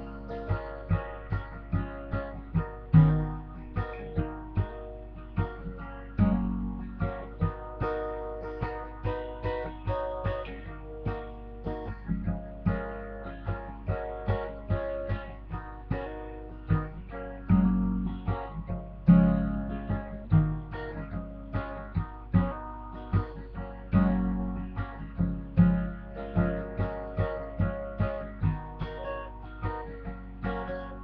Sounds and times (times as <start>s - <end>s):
Acoustic guitar: 0.0s - 31.0s
Strum: 0.0s - 31.0s.